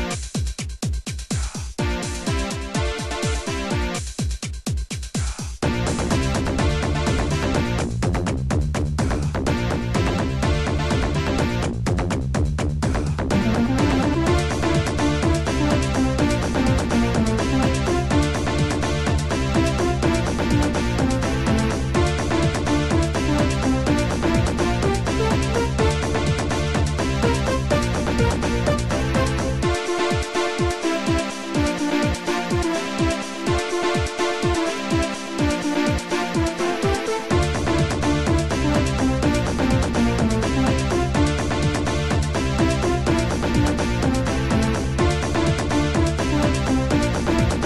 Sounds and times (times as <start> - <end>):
Music: 0.0 - 47.6.